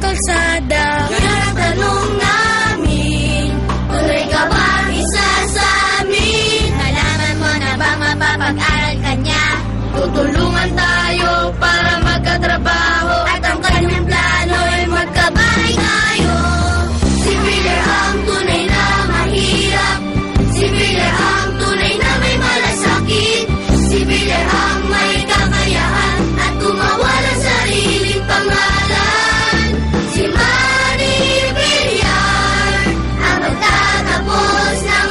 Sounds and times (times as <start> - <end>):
Jingle (music): 0.0 - 35.1.